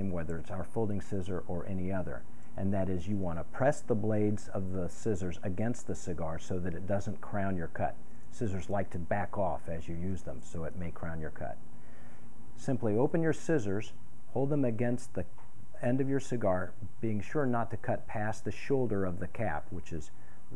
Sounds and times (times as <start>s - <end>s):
Speech: 0.0s - 11.6s, 12.6s - 20.5s.